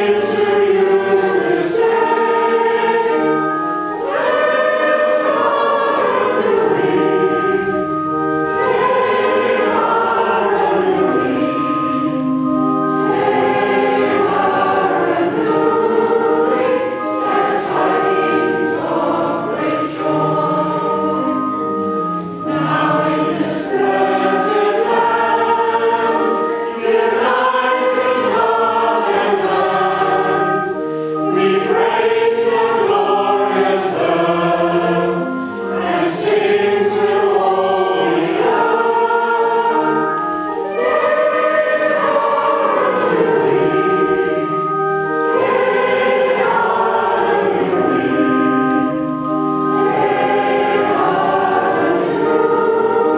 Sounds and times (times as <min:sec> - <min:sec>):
Choir: 0:00.0 - 0:53.1
Inside, large room or hall: 0:00.0 - 0:53.1.